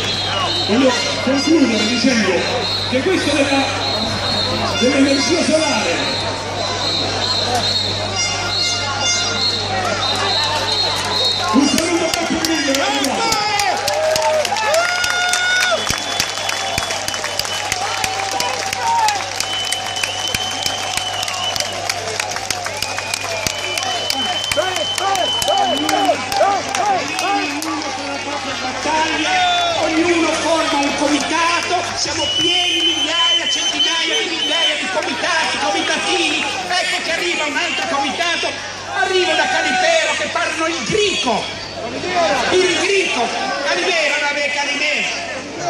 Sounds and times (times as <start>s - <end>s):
Speech: 0.4s - 13.8s, 23.8s - 45.7s.